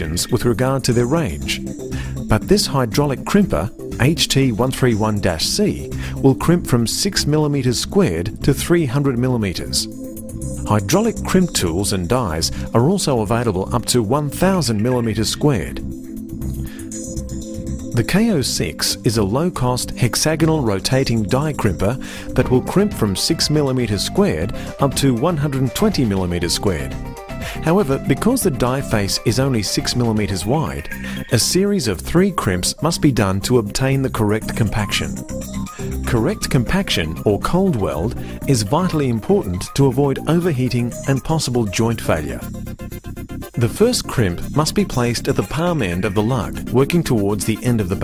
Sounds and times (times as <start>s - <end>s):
Speech: 0.0s - 1.6s, 2.2s - 9.9s, 10.7s - 15.8s, 18.0s - 27.0s, 27.6s - 35.2s, 36.0s - 42.5s, 43.6s - 48.0s
Music: 0.0s - 48.0s.